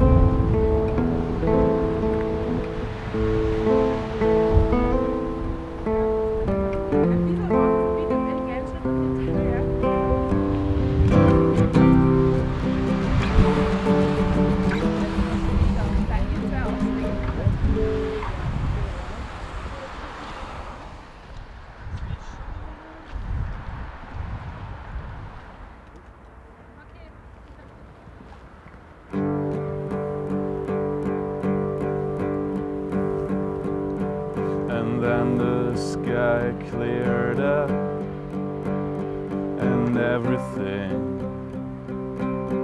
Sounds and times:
Music: 0.0s - 18.2s, 29.1s - 42.6s.

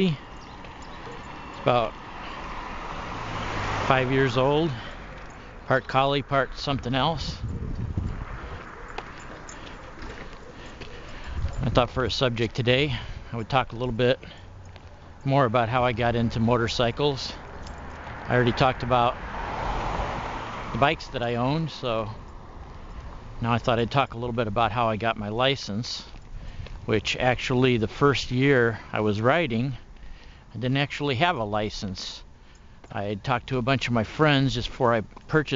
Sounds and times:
Speech: 0.0s - 0.2s, 1.6s - 2.0s, 3.9s - 4.9s, 5.6s - 7.4s, 11.6s - 14.4s, 15.2s - 17.4s, 18.3s - 19.2s, 20.8s - 22.2s, 23.4s - 26.2s, 26.9s - 29.8s, 30.5s - 32.3s, 32.9s - 35.5s
Vehicle: 0.0s - 35.5s.

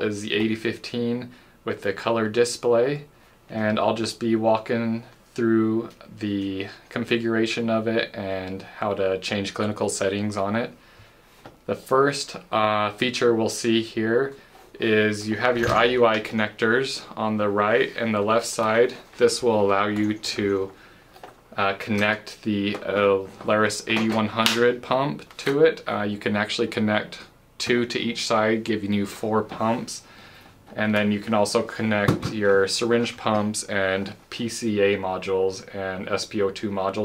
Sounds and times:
Speech: 0.0s - 10.8s, 11.7s - 20.8s, 21.5s - 30.1s, 30.7s - 37.0s.

